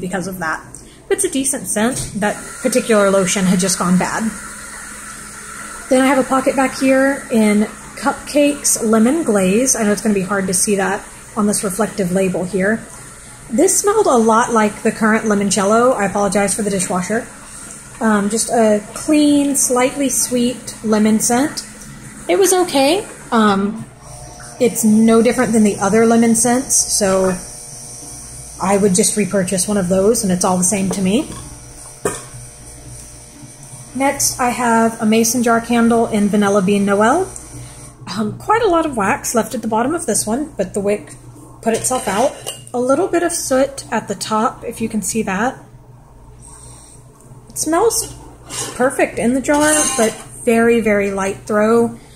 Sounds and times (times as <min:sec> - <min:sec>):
Speech: 0:00.0 - 0:04.4, 0:05.9 - 0:12.9, 0:13.5 - 0:17.3, 0:18.0 - 0:21.7, 0:22.3 - 0:23.9, 0:24.6 - 0:27.4, 0:28.6 - 0:31.4, 0:34.0 - 0:37.4, 0:38.1 - 0:45.7, 0:47.5 - 0:52.0.